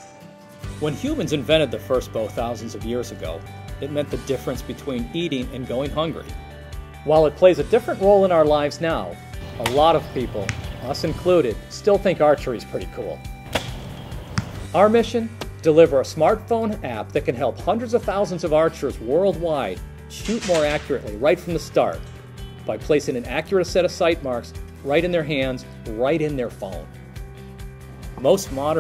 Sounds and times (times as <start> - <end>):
Arrow: 9.6 - 9.8, 13.5 - 14.6, 20.2 - 21.1.